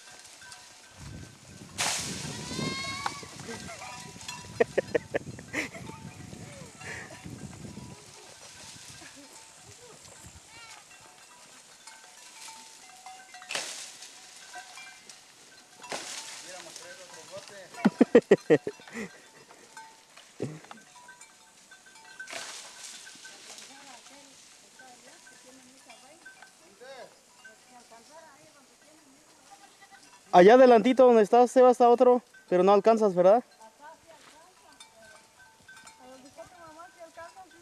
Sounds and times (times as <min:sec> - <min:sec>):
Goat: 0:02.2 - 0:13.1.